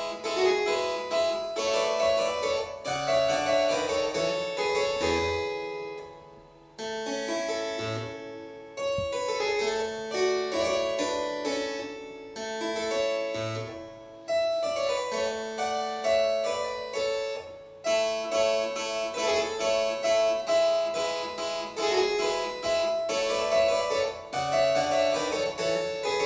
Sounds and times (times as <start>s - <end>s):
Harpsichord: 0.0s - 26.2s.